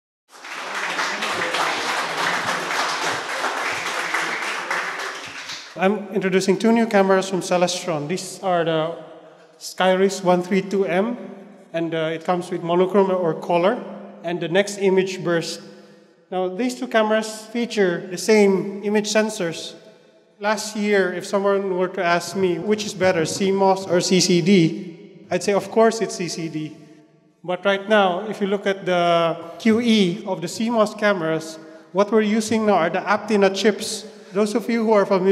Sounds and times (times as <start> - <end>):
Speech: 0.9 - 5.0, 5.7 - 9.0, 9.6 - 11.2, 11.8 - 15.6, 16.3 - 19.7, 20.4 - 24.7, 25.3 - 26.7, 27.5 - 35.3.